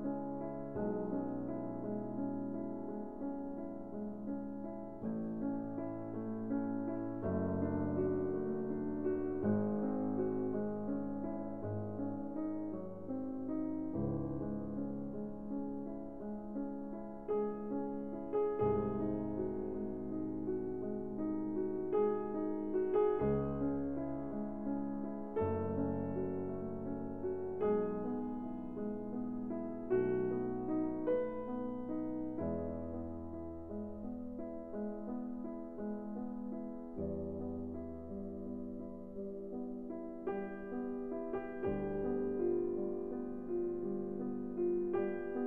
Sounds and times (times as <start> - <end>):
Music: 0.0 - 45.4.